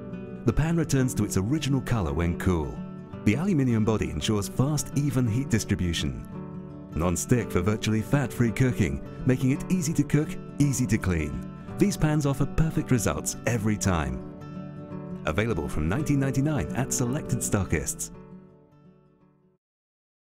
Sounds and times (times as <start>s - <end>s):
Music: 0.0s - 19.6s
Speech: 0.5s - 6.3s, 7.0s - 14.2s, 15.3s - 18.2s.